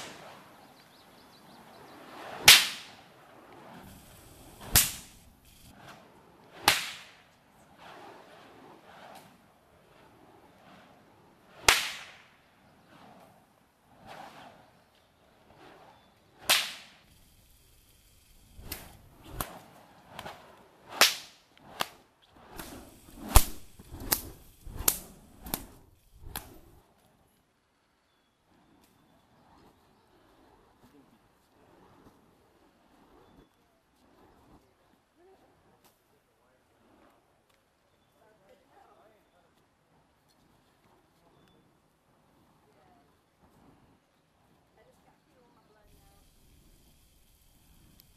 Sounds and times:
Whip: 0.0s - 0.5s, 2.3s - 3.8s, 4.6s - 5.2s, 5.8s - 9.5s, 11.5s - 13.4s, 16.4s - 17.1s, 18.6s - 26.6s.

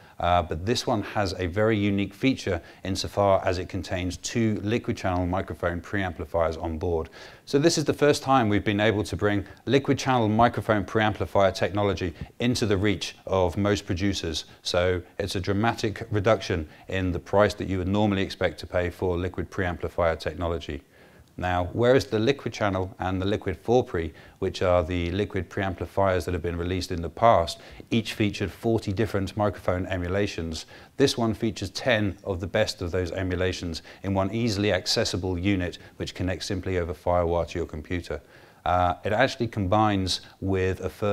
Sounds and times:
Speech: 0.2s - 41.1s.

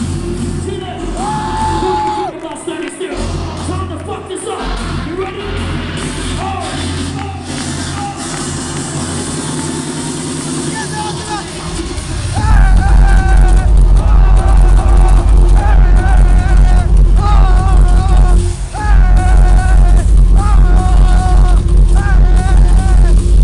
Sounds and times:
Music: 0.0s - 23.4s.

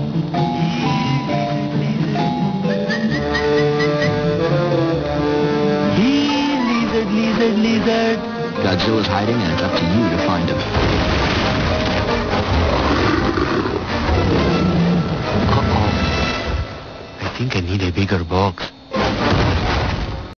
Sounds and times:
Music: 0.0s - 20.3s
Speech: 17.2s - 18.8s.

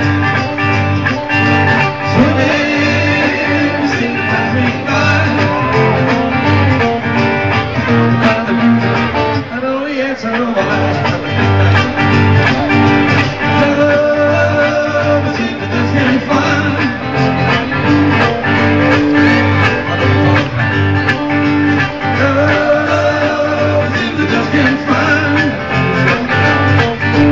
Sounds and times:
Music: 0.0s - 27.3s.

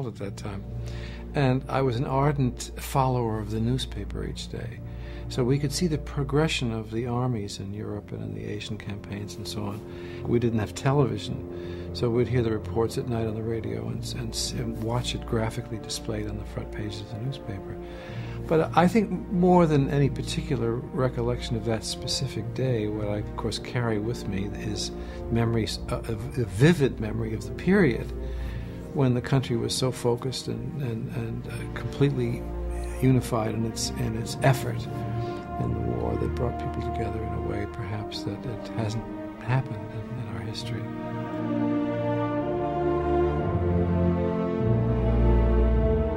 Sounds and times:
Speech: 0.0s - 0.6s, 1.3s - 17.8s, 18.5s - 28.2s, 28.9s - 41.0s
Sad music: 0.0s - 46.1s.

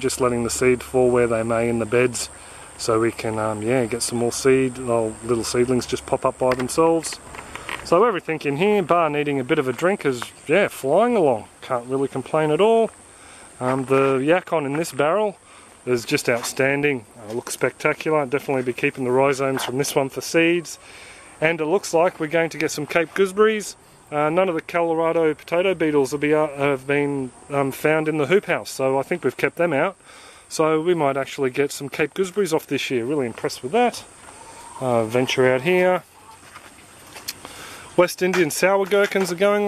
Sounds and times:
Speech: 0.0s - 7.2s, 7.8s - 13.0s, 13.6s - 20.8s, 21.4s - 34.1s, 34.8s - 36.1s, 38.0s - 39.6s
Outside, rural or natural: 0.0s - 39.6s.

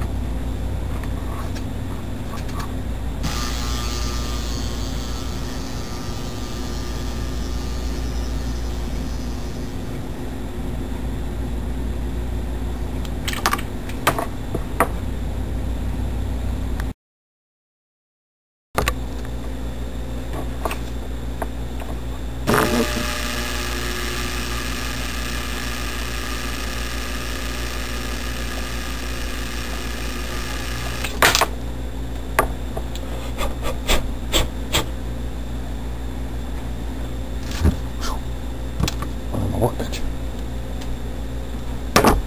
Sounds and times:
Speech: 39.3s - 40.1s.

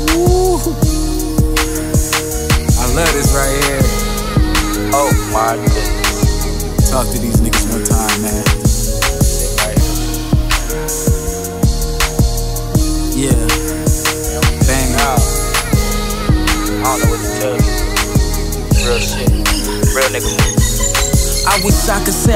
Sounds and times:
Music: 0.0s - 22.3s
Speech: 2.8s - 4.0s, 4.9s - 5.9s, 6.8s - 8.5s, 9.2s - 9.9s, 13.2s - 13.6s, 14.4s - 15.3s, 16.8s - 17.6s, 18.8s - 20.6s, 21.5s - 22.3s.

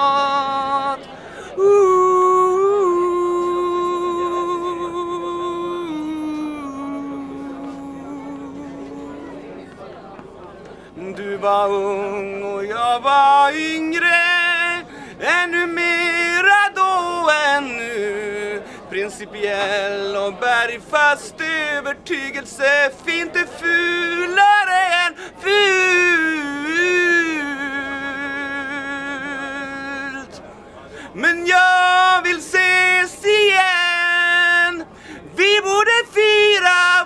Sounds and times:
Speech: 5.8s - 37.0s.

